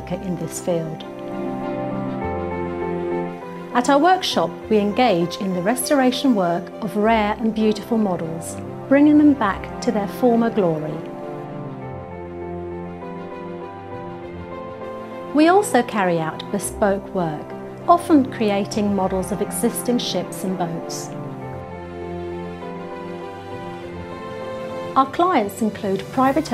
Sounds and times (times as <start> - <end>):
Speech: 0.0 - 1.1, 3.8 - 11.1, 15.4 - 21.1, 25.0 - 26.5
Music: 0.0 - 26.5.